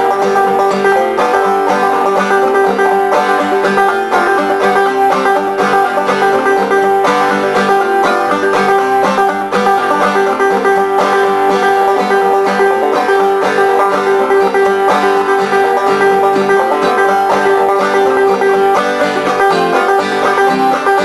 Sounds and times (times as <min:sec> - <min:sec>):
Banjo: 0:00.0 - 0:21.0
Bluegrass: 0:00.0 - 0:21.0
Mandolin: 0:00.0 - 0:21.0.